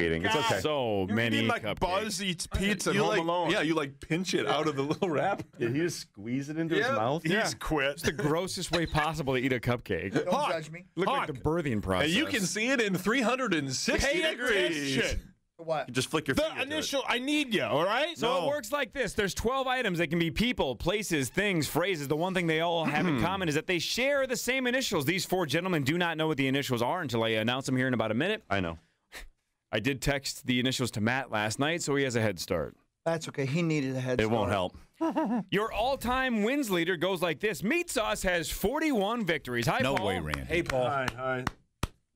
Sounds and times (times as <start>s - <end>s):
Speech: 0.0s - 28.8s, 35.6s - 41.5s.